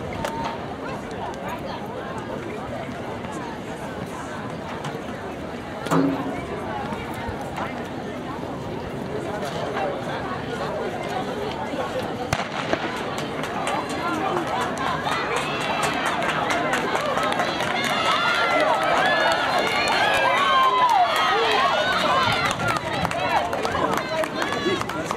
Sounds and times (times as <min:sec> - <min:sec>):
Inside, public space: 0:00.0 - 0:25.1
Speech: 0:00.0 - 0:25.1.